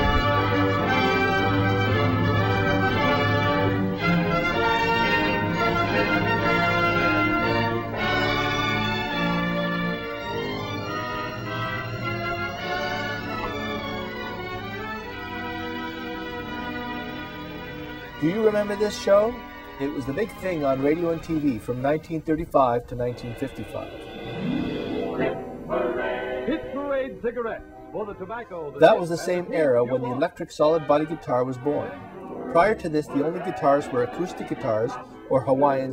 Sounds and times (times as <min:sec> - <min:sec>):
Guitar: 0:00.0 - 0:21.6, 0:23.3 - 0:35.9
Speech: 0:18.2 - 0:23.9, 0:26.6 - 0:32.0, 0:32.6 - 0:35.9.